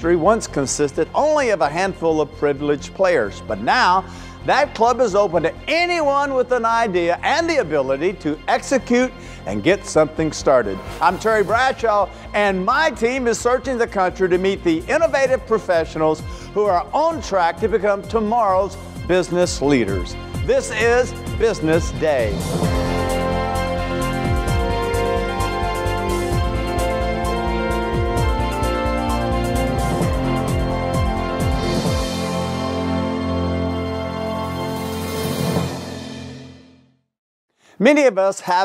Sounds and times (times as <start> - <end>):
Speech: 0.0 - 22.4, 37.8 - 38.6
Music: 0.0 - 38.6.